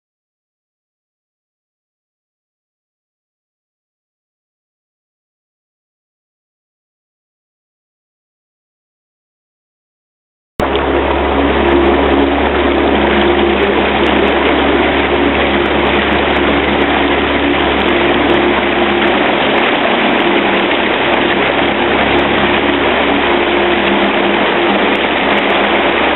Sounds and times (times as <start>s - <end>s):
Vehicle: 10.6s - 26.1s.